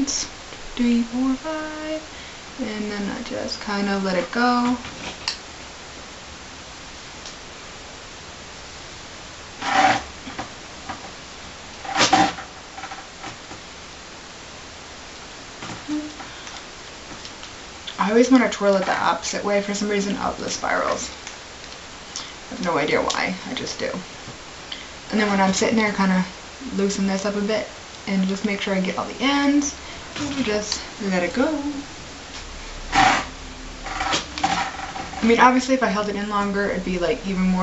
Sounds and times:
Speech: 2.6s - 4.8s, 17.9s - 21.2s, 22.5s - 24.1s, 25.1s - 31.8s, 35.2s - 37.6s.

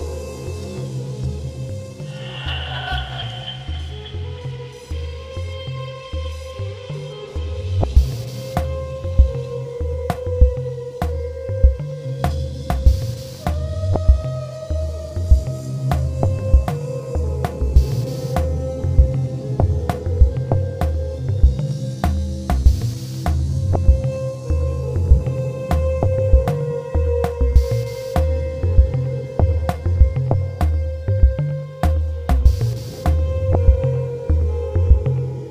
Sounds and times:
Music: 0.0s - 35.5s.

